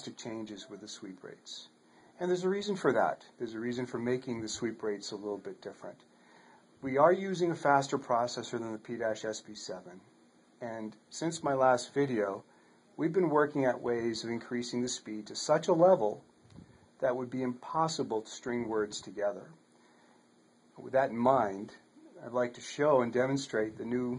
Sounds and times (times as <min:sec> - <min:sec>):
Speech: 0:00.0 - 0:06.1, 0:06.8 - 0:16.2, 0:17.0 - 0:19.6, 0:20.8 - 0:24.1.